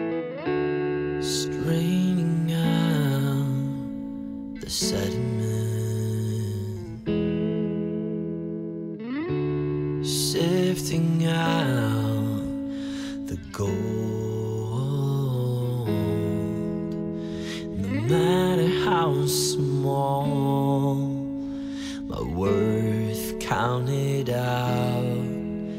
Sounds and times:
Sad music: 0.0s - 25.7s.

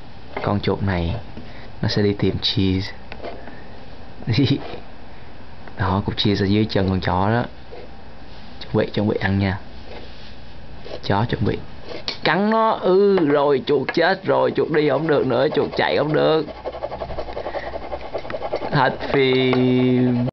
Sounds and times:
Speech: 0.4s - 3.0s, 4.2s - 4.8s, 5.8s - 7.5s, 8.6s - 9.7s, 11.0s - 16.5s, 18.7s - 20.3s.

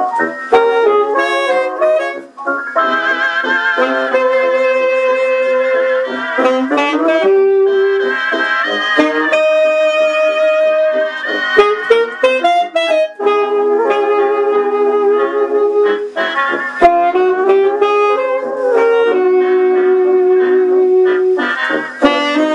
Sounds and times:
Brass instrument: 0.0s - 22.5s
Saxophone: 0.0s - 22.5s.

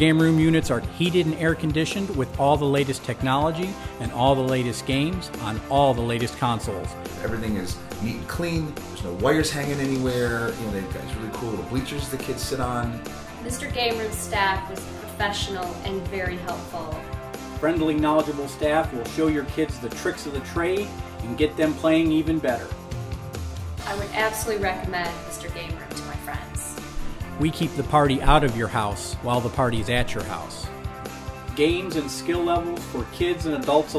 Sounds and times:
Speech: 0.0s - 13.0s, 27.4s - 30.6s
Music: 0.0s - 33.9s.

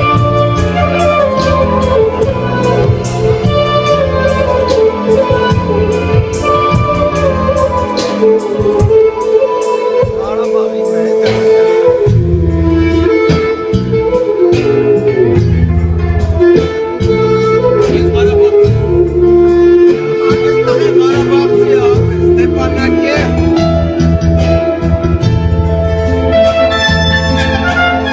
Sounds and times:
Inside, large room or hall: 0.0s - 28.1s
Music: 0.0s - 28.1s
Speech: 10.0s - 11.4s, 17.8s - 18.9s, 20.6s - 23.4s.

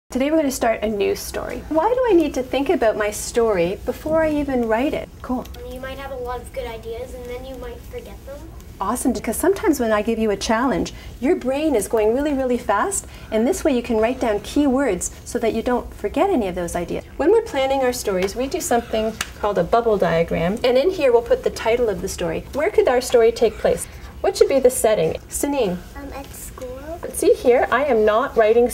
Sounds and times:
Child speech, kid speaking: 5.5s - 8.6s, 25.9s - 27.2s.

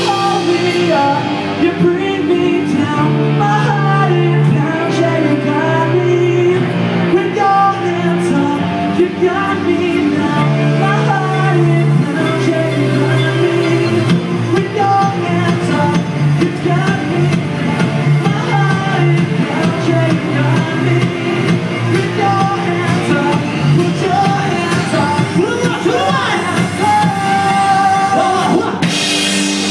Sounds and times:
Singing: 0.0s - 28.9s
Inside, large room or hall: 0.0s - 29.7s
Music: 0.0s - 29.7s.

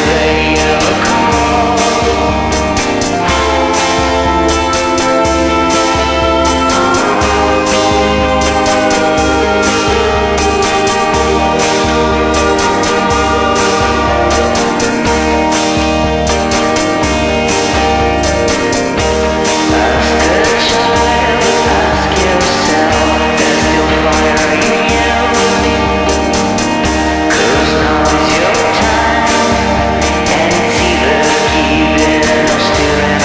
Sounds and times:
Music: 0.0s - 33.2s.

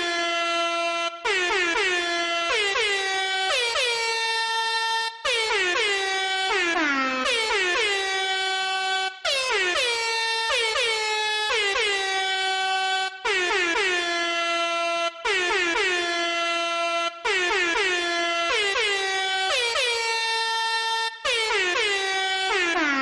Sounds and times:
Air horn, truck horn: 0.0s - 23.0s.

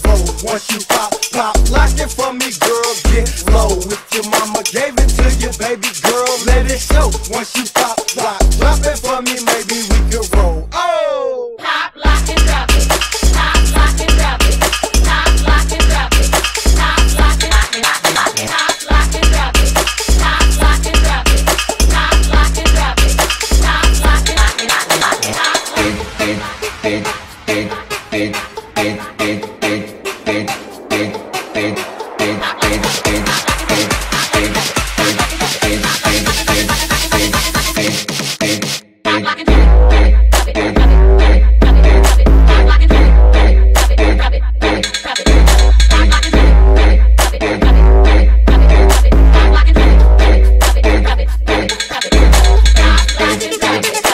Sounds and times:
Music: 0.0s - 10.7s, 11.9s - 54.1s.

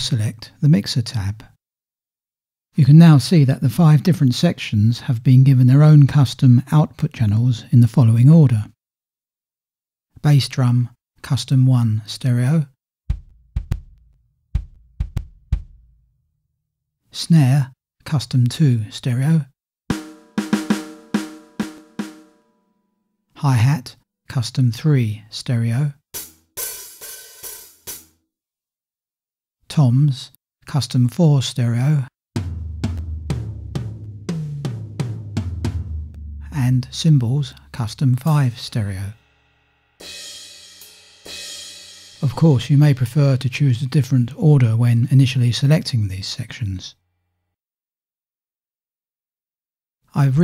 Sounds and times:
Speech: 0.0s - 1.6s, 2.7s - 8.8s, 10.2s - 12.8s, 17.1s - 19.6s, 23.3s - 26.0s, 29.7s - 32.2s, 36.4s - 39.2s, 42.2s - 47.0s, 50.1s - 50.4s.

